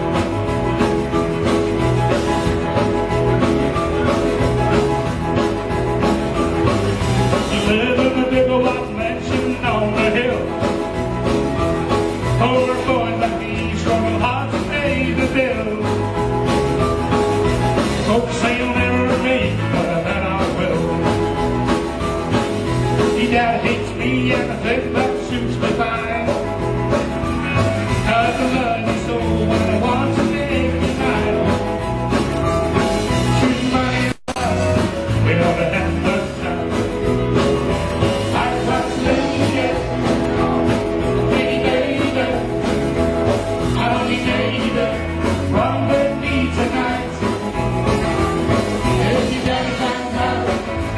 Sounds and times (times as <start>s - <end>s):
Music: 0.0s - 50.9s.